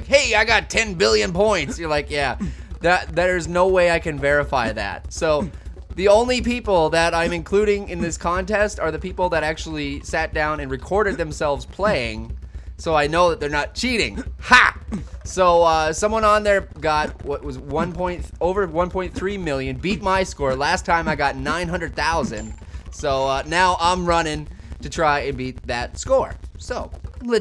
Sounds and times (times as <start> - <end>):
Speech: 0.0 - 27.4.